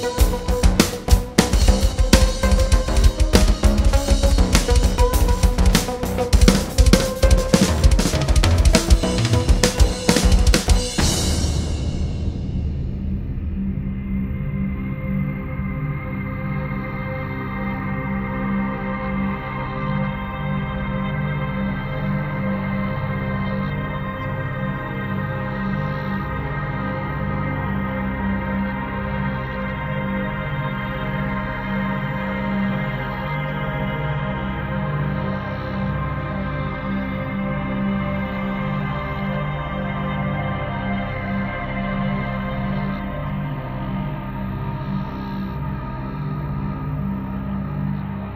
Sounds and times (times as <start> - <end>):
Ambient music: 0.0 - 48.3.